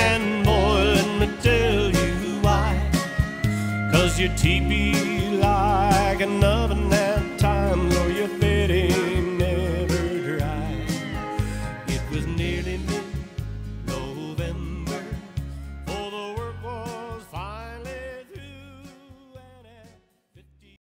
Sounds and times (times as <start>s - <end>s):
Music: 0.0s - 20.8s.